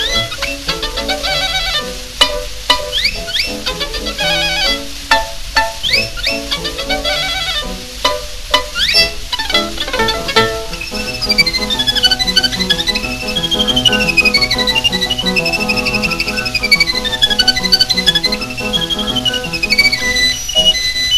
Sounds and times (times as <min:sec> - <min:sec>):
Pizzicato: 0:00.0 - 0:21.1.